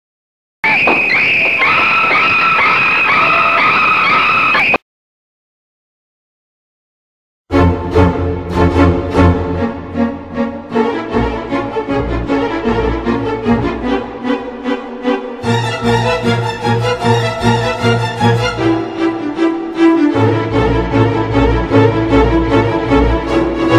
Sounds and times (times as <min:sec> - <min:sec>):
Music: 0:07.5 - 0:23.7.